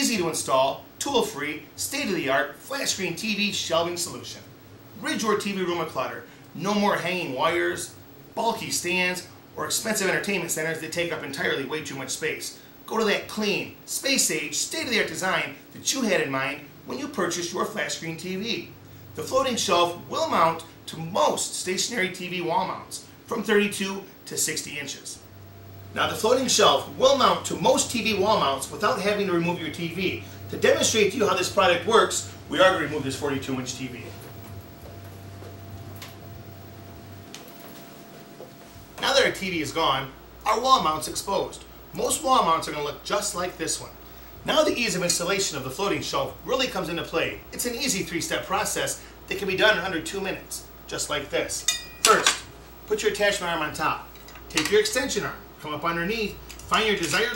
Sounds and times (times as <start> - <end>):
Speech: 0.0 - 25.2, 26.0 - 34.3, 39.0 - 57.3.